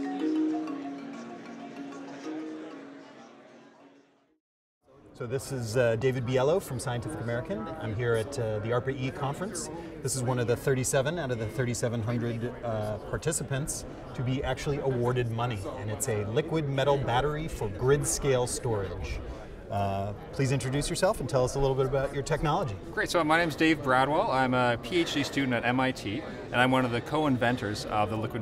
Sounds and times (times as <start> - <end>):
Speech: 5.2 - 28.4.